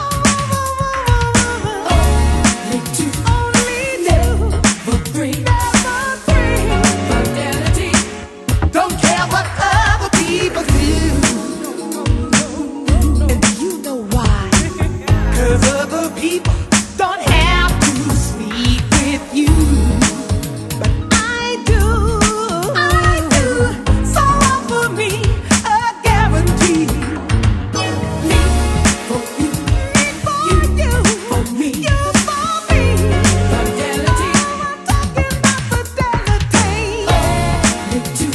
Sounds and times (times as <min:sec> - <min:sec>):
Funk: 0:00.0 - 0:38.3
Soul music: 0:00.0 - 0:38.3.